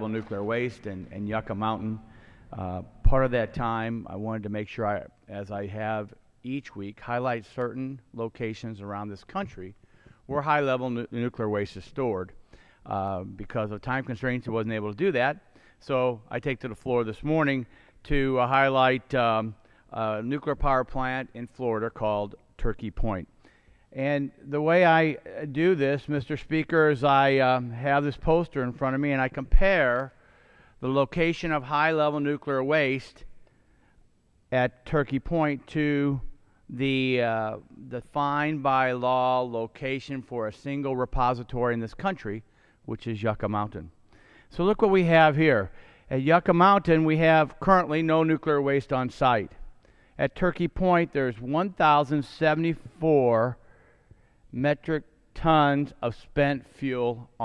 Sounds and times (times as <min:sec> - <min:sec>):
Speech: 0:00.0 - 0:23.3, 0:23.9 - 0:30.1, 0:30.8 - 0:33.3, 0:34.5 - 0:43.9, 0:44.5 - 0:49.6, 0:50.2 - 0:53.6, 0:54.5 - 0:57.4.